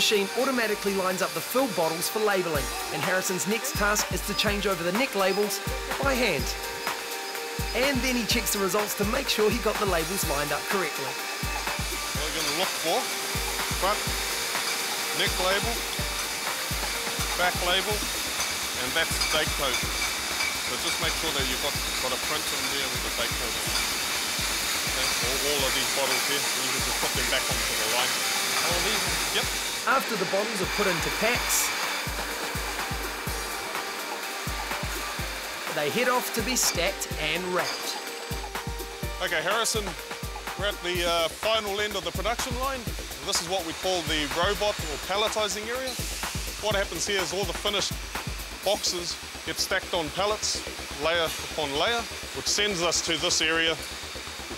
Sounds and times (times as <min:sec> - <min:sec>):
Speech: 0:00.0 - 0:06.6, 0:07.8 - 0:11.2, 0:12.2 - 0:13.0, 0:13.8 - 0:14.0, 0:15.2 - 0:15.8, 0:17.4 - 0:18.0, 0:18.8 - 0:19.8, 0:20.7 - 0:23.7, 0:25.0 - 0:31.7, 0:35.7 - 0:38.0, 0:39.2 - 0:40.0, 0:40.6 - 0:46.0, 0:46.6 - 0:48.0, 0:48.6 - 0:53.8
Music: 0:00.0 - 0:54.5.